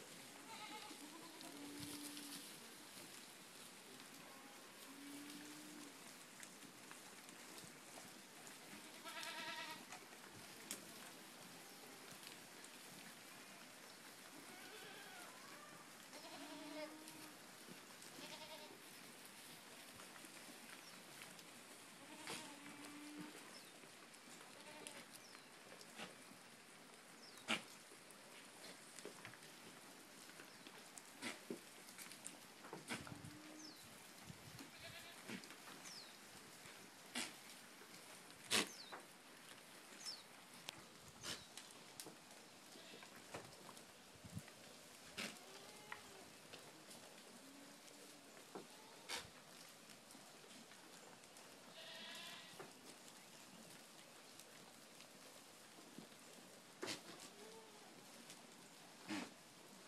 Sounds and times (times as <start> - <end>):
Goat: 0.0 - 59.8.